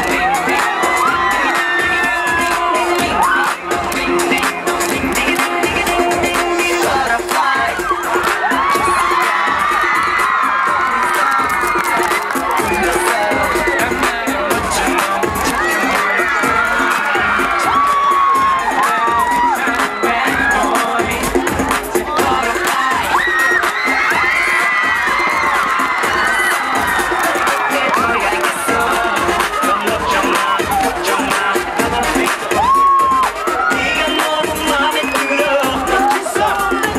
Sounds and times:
Music: 0.0 - 36.9.

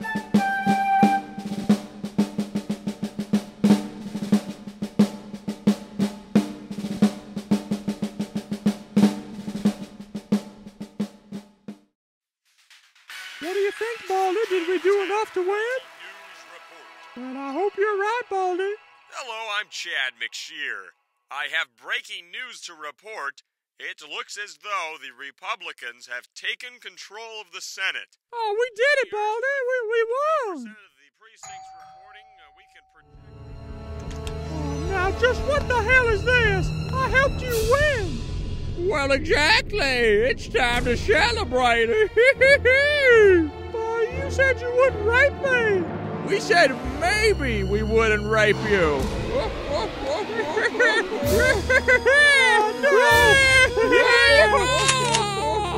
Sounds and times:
Drum kit: 0.0 - 11.8, 12.6 - 15.9, 34.2 - 45.7, 46.3 - 55.7
Drum roll: 0.0 - 11.9, 12.5 - 19.5, 34.6 - 55.7.

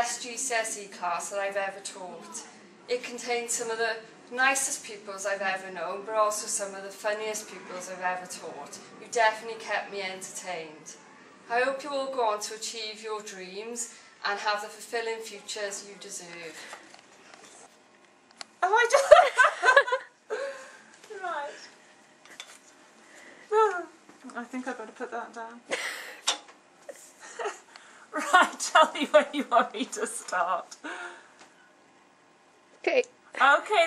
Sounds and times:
Speech: 0.0 - 16.7, 28.2 - 30.8, 32.8 - 33.8
Inside, small room: 0.0 - 33.8.

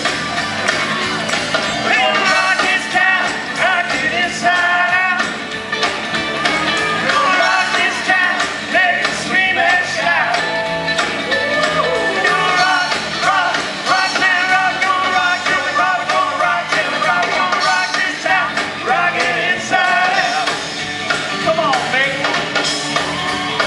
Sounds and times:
Rock and roll: 0.0 - 23.6.

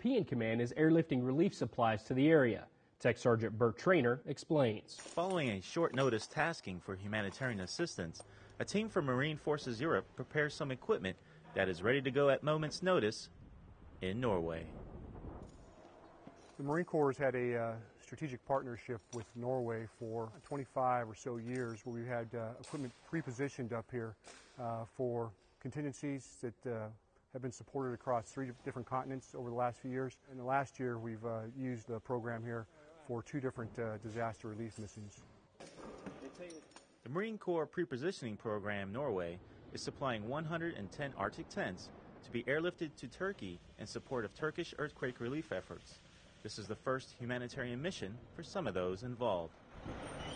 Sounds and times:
Speech: 0.0 - 13.3, 14.0 - 14.8, 16.6 - 35.2, 36.2 - 49.5.

